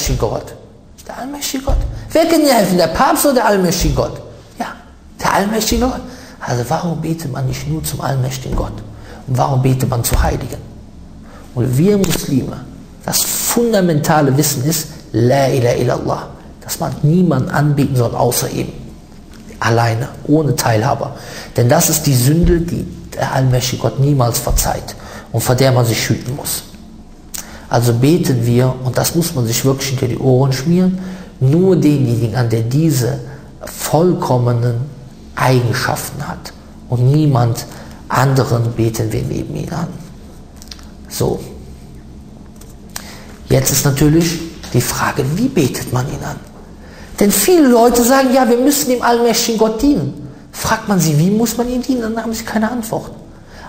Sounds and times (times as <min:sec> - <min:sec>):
Speech: 0:00.0 - 0:10.8, 0:11.6 - 0:26.8, 0:27.4 - 0:41.8, 0:43.4 - 0:46.5, 0:47.2 - 0:53.3.